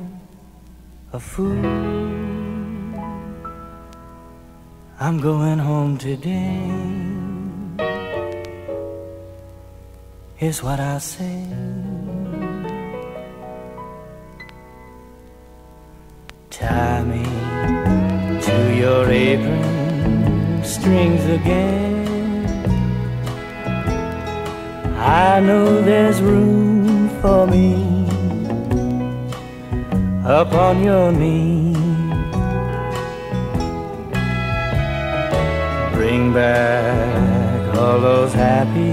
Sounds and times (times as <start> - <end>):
Steel guitar, slide guitar: 15.0 - 38.9.